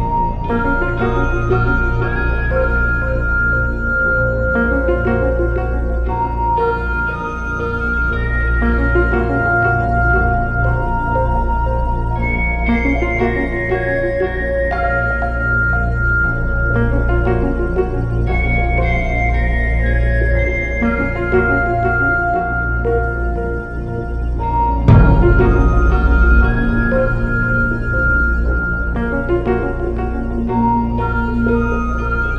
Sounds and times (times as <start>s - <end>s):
Music: 0.0s - 32.3s.